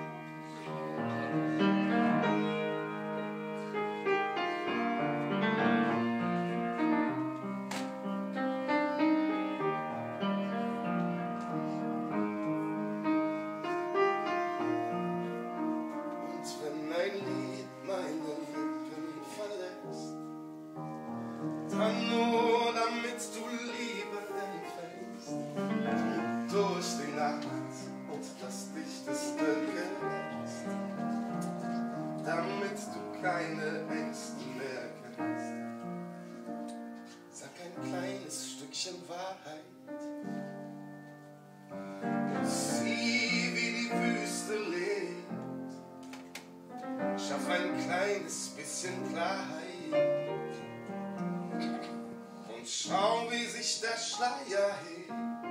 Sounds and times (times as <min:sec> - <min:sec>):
Music: 0:00.0 - 0:55.5.